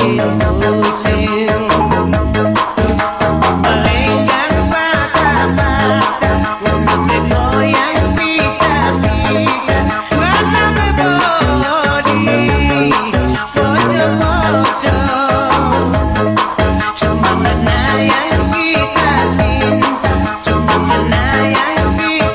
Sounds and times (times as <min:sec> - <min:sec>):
Music: 0:00.0 - 0:22.3.